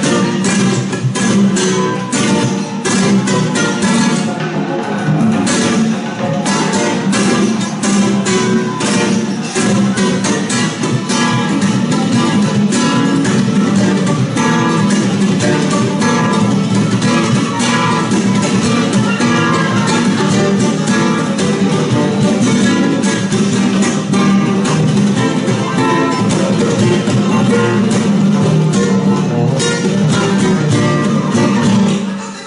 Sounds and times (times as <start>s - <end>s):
Guitar: 0.0s - 32.4s.